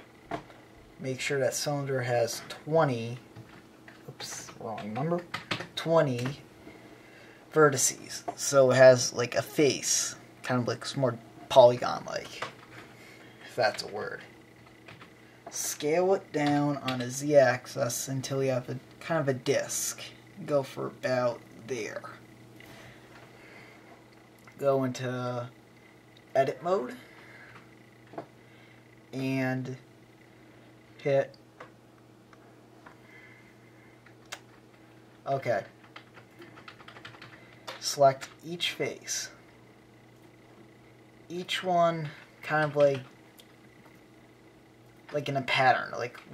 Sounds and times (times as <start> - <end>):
Speech: 1.0 - 3.3, 4.1 - 6.4, 7.5 - 12.5, 13.5 - 14.3, 15.5 - 22.2, 24.6 - 25.6, 26.3 - 27.1, 29.1 - 29.8, 31.0 - 31.3, 35.2 - 35.8, 37.8 - 39.4, 41.3 - 43.1, 45.1 - 46.3.